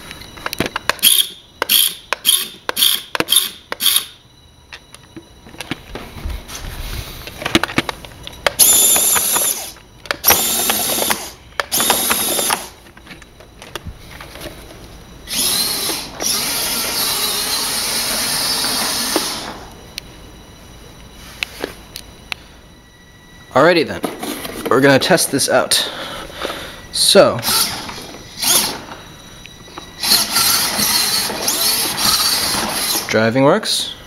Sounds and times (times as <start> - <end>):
Speech: 24.7 - 25.9, 27.0 - 27.4, 33.1 - 34.0.